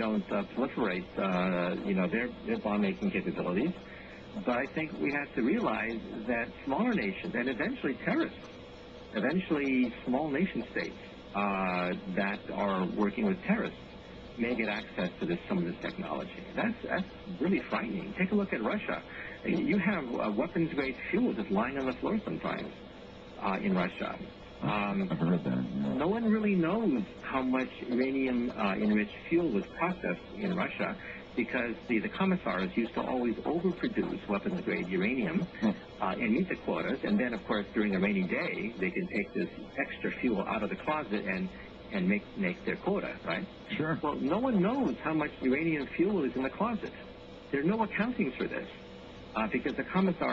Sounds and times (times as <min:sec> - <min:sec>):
Speech: 0:00.0 - 0:08.4, 0:09.1 - 0:13.8, 0:14.4 - 0:22.8, 0:23.4 - 0:50.3.